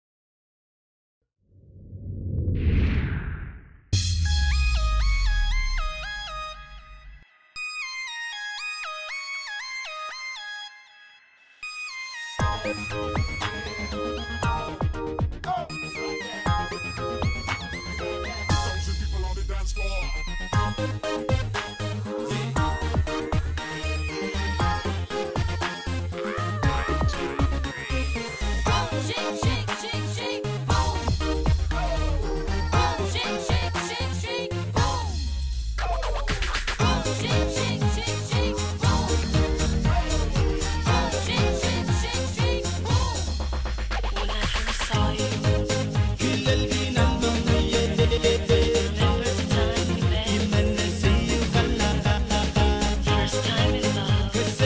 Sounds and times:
Music: 4.0 - 54.6.

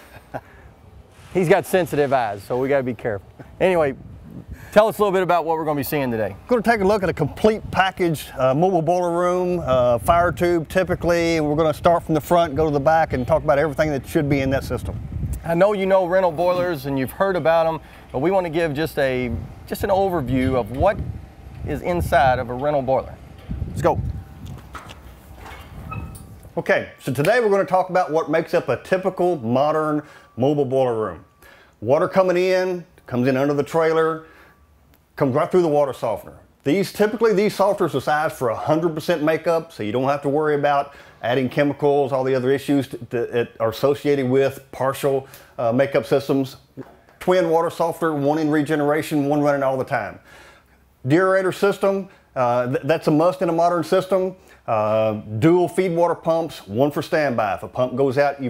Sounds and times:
Speech: 1.3 - 4.0, 4.7 - 21.0, 21.7 - 23.2, 23.8 - 24.0, 26.6 - 31.2, 31.8 - 34.2, 35.2 - 50.2, 51.0 - 58.4.

